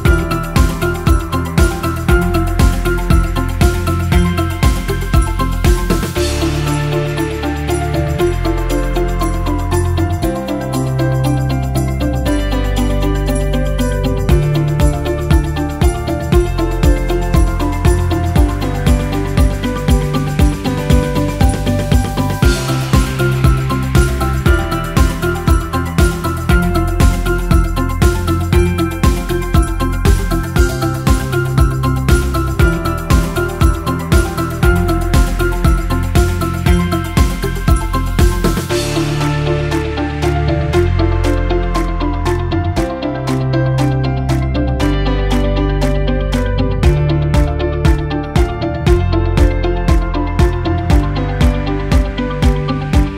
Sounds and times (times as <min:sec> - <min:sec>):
Music: 0:00.0 - 0:53.1.